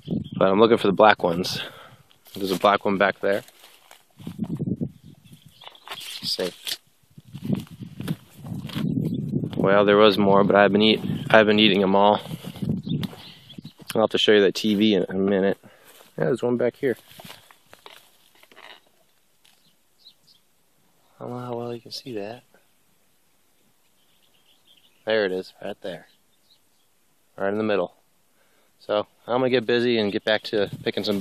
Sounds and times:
Outside, rural or natural: 0.0 - 31.2
Speech: 0.4 - 1.7, 2.4 - 3.5, 6.2 - 6.6, 9.6 - 12.2, 13.9 - 15.6, 16.2 - 17.0, 21.2 - 22.5, 25.1 - 26.1, 27.4 - 28.0, 28.8 - 31.2.

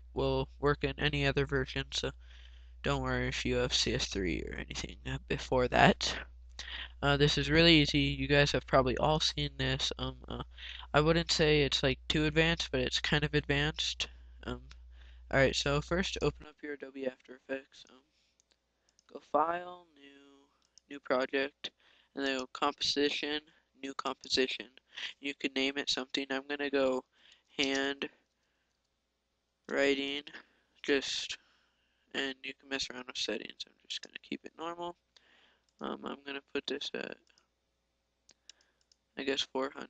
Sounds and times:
Speech: 0.0 - 2.2, 2.9 - 18.0, 19.1 - 27.0, 27.6 - 28.2, 29.7 - 31.4, 32.2 - 35.0, 35.8 - 37.2, 39.2 - 39.9.

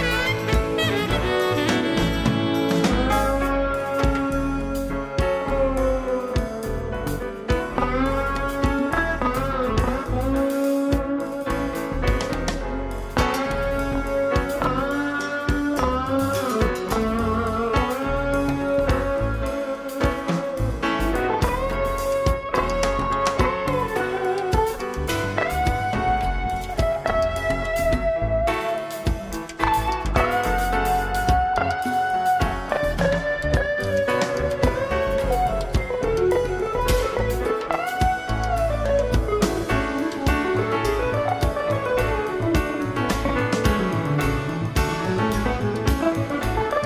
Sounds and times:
Music: 0.0 - 46.8.

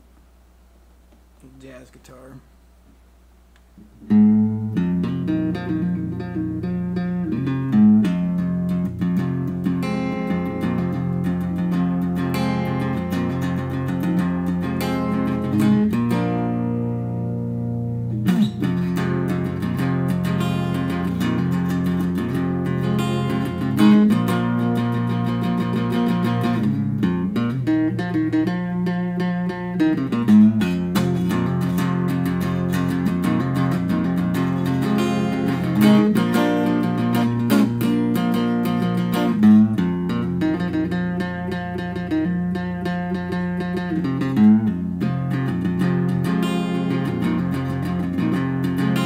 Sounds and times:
Guitar: 1.0 - 49.0.

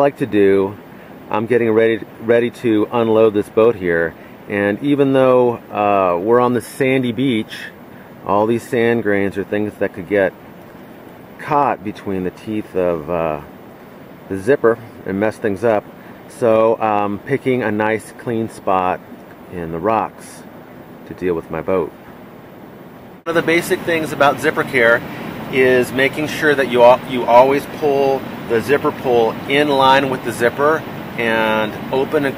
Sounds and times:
Speech: 0.0 - 10.4, 11.4 - 13.5, 14.3 - 22.0, 23.3 - 32.3.

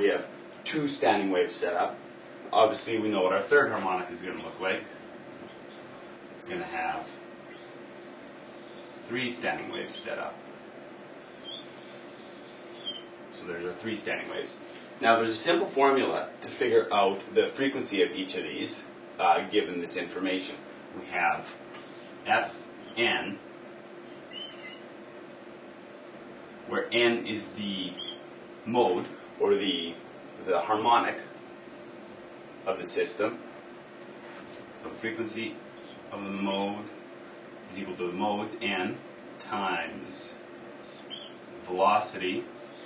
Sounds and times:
Speech: 0.0 - 5.0, 6.4 - 7.2, 9.1 - 10.4, 13.4 - 21.6, 22.2 - 23.4, 26.7 - 28.0, 28.6 - 31.4, 32.6 - 33.4, 34.8 - 37.0, 37.7 - 40.4, 41.6 - 42.5
Inside, small room: 0.0 - 42.8.

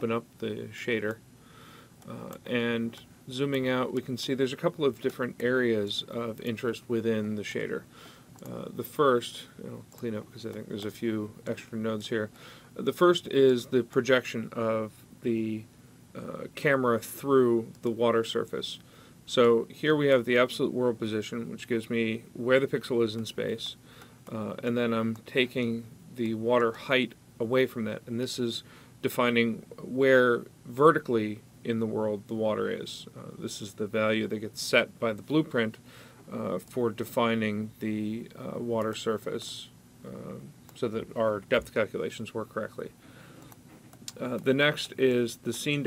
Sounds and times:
Speech: 0.0 - 1.2, 2.0 - 43.0, 44.1 - 45.8.

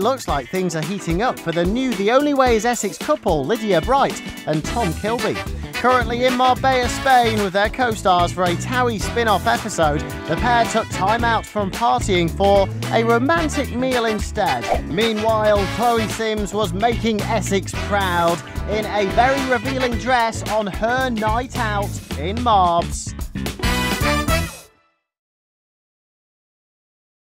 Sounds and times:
Speech: 0.0 - 23.1
Music: 0.0 - 25.2.

